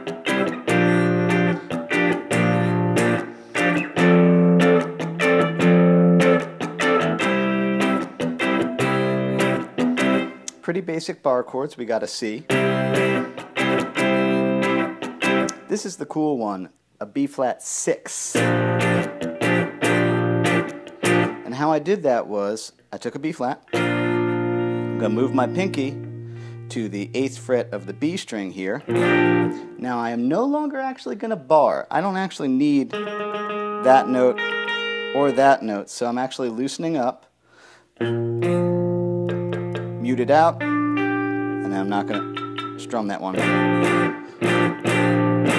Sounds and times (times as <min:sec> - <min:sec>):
Electric guitar: 0:00.0 - 0:10.6, 0:12.5 - 0:15.7, 0:18.4 - 0:21.5, 0:23.6 - 0:30.1, 0:32.8 - 0:35.6, 0:38.0 - 0:45.5
Speech: 0:10.5 - 0:12.5, 0:15.7 - 0:18.4, 0:21.4 - 0:23.7, 0:25.0 - 0:26.0, 0:26.7 - 0:28.9, 0:29.8 - 0:33.0, 0:33.8 - 0:34.4, 0:35.2 - 0:37.2, 0:40.0 - 0:40.6, 0:41.6 - 0:42.2, 0:42.8 - 0:43.5.